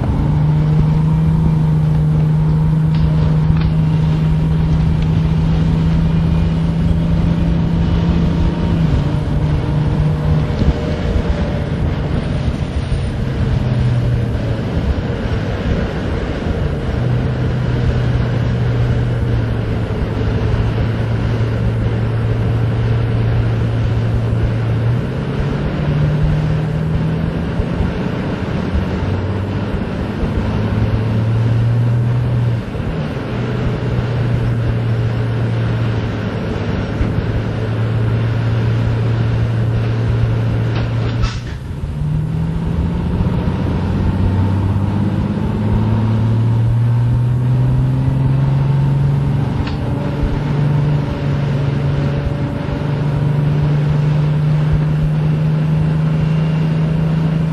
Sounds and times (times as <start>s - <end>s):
Bus: 0.0s - 57.5s.